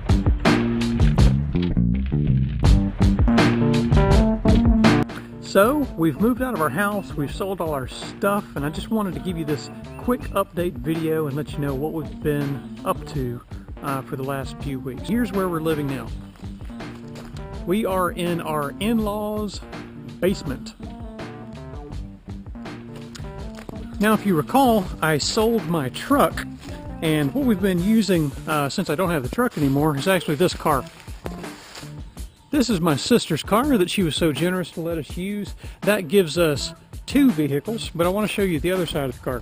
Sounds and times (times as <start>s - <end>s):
Music: 0.0s - 39.4s
Speech: 5.5s - 16.2s, 17.6s - 19.6s, 20.2s - 20.8s, 24.0s - 26.4s, 27.0s - 30.9s, 32.5s - 39.4s.